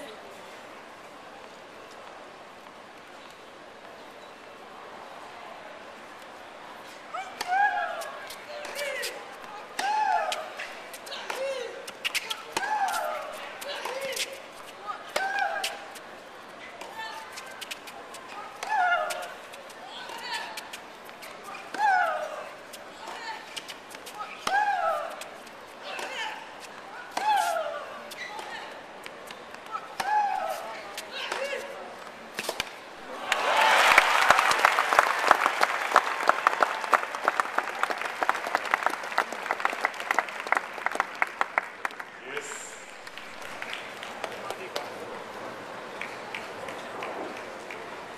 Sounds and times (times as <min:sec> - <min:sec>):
Outside, urban or manmade: 0:00.0 - 0:48.1.